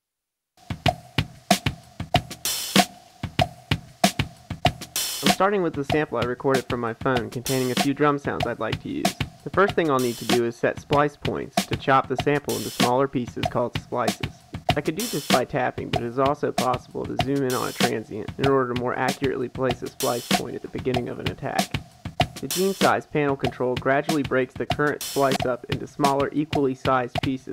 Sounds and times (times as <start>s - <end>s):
Music: 0.6s - 27.5s.